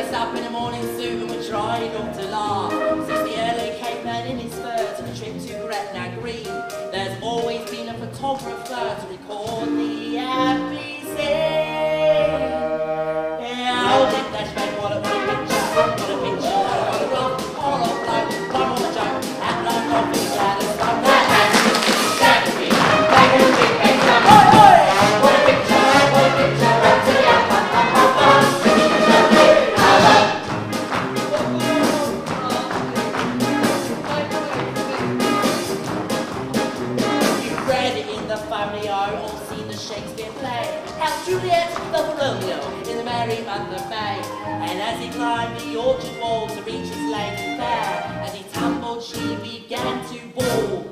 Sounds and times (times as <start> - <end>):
Music: 0.0 - 50.9.